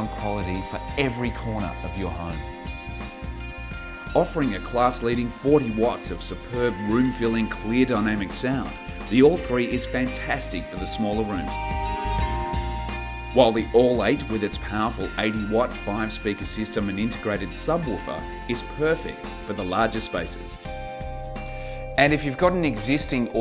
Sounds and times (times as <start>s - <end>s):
Speech: 0.0s - 2.4s, 4.2s - 11.6s, 13.4s - 20.6s, 22.0s - 23.4s
Music: 0.0s - 23.4s.